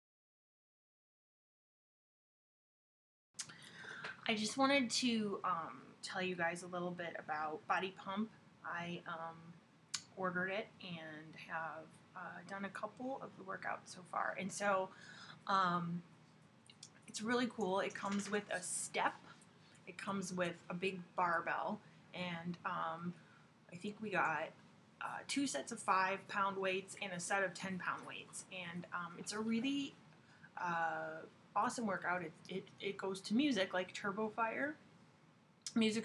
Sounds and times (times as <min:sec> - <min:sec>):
Speech: 0:04.1 - 0:16.1, 0:17.1 - 0:19.3, 0:19.9 - 0:30.0, 0:30.6 - 0:34.8, 0:35.7 - 0:36.0.